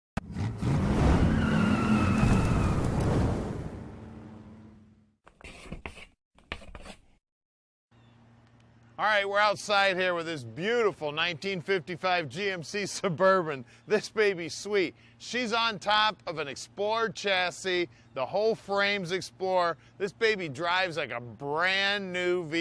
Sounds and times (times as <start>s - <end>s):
Vehicle: 0.2s - 5.1s
Speech: 9.0s - 22.6s.